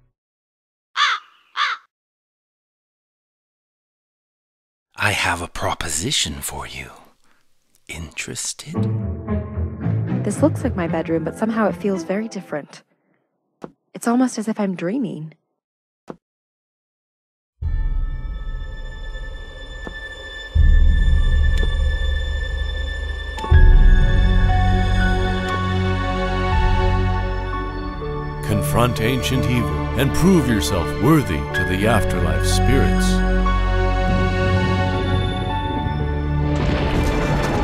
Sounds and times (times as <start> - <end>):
Speech: 5.0 - 7.1, 7.9 - 8.9, 14.0 - 15.4, 28.4 - 33.2
Music: 8.6 - 12.9, 17.6 - 37.6.